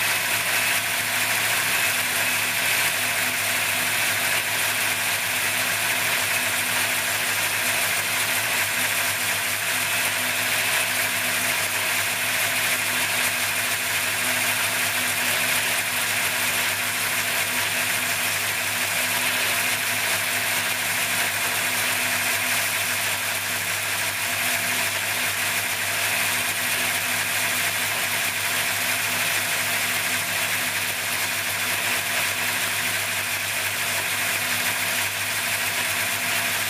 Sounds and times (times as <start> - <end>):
Engine: 0.0 - 36.6.